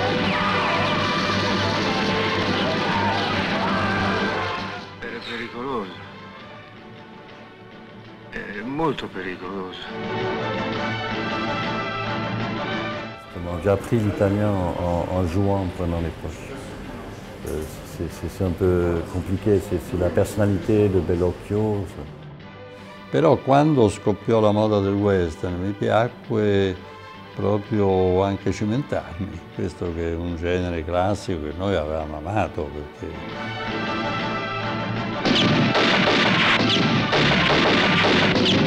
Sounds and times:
Music: 0.0 - 38.6
Speech: 5.0 - 6.0, 8.4 - 10.0, 13.4 - 16.8, 17.4 - 22.1, 23.1 - 26.8, 27.4 - 33.2.

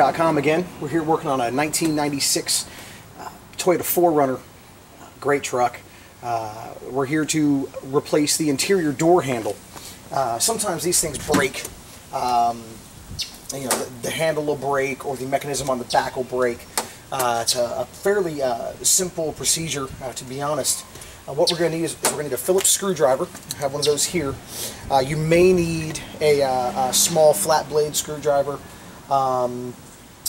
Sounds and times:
Speech: 0.0 - 12.8, 13.5 - 30.2.

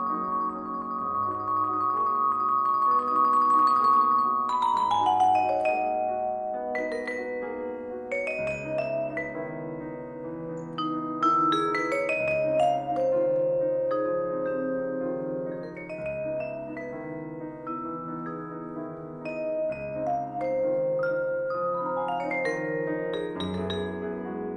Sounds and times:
Glockenspiel: 0.0 - 24.5
Marimba, xylophone: 0.0 - 24.5.

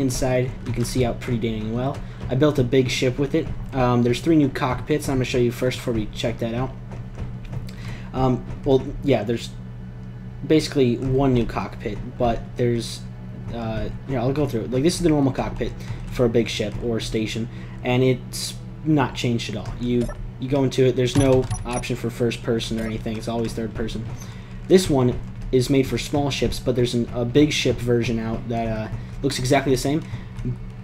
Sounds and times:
Speech: 0.0 - 6.8, 8.1 - 9.6, 10.4 - 30.6
Music: 0.0 - 9.2.

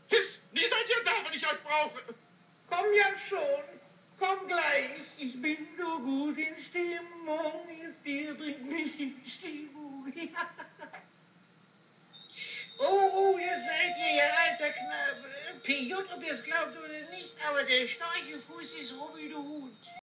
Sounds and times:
Speech: 13.1 - 19.8.

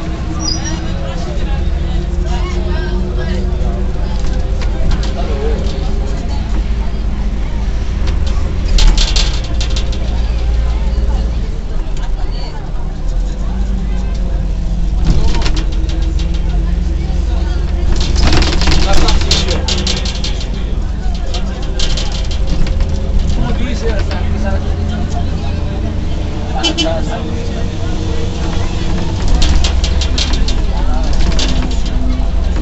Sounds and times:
Bus: 0.0 - 32.6
Outside, urban or manmade: 0.0 - 32.6
Speech: 0.0 - 32.6
Vehicle horn, car horn, honking: 26.6 - 27.0.

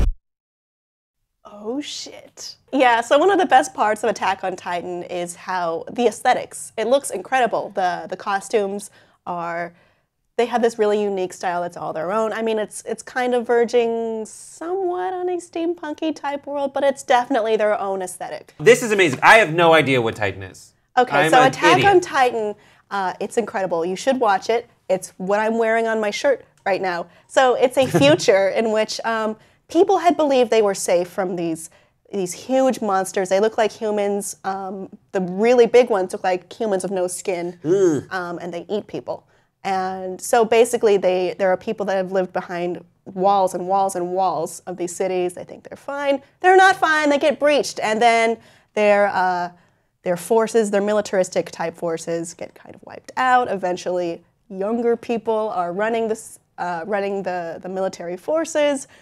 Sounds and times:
Speech: 1.5 - 9.7, 10.4 - 49.5, 50.1 - 58.9.

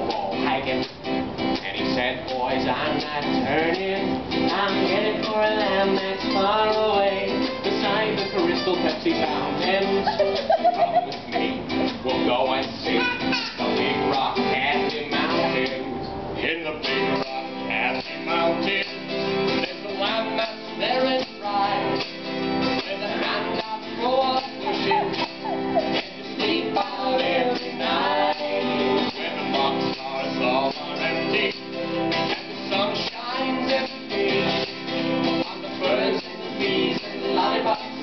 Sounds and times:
Music: 0.0 - 38.0.

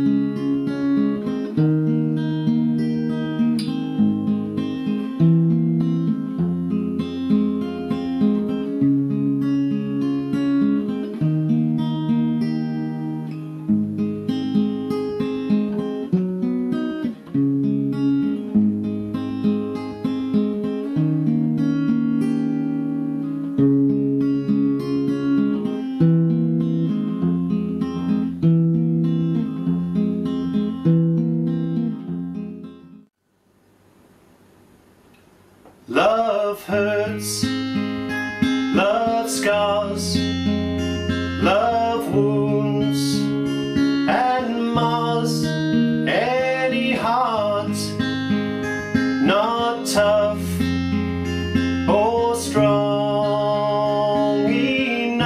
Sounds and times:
Acoustic guitar: 0.0 - 33.2, 35.0 - 55.2.

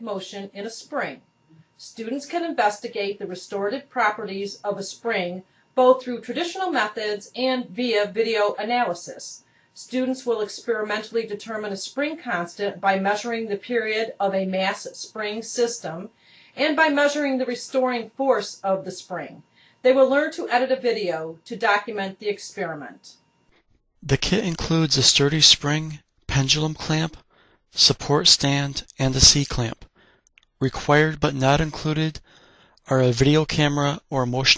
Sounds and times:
Speech: 0.0 - 1.2, 1.8 - 23.2, 24.0 - 27.2, 27.8 - 29.9, 30.6 - 32.2, 32.9 - 34.5.

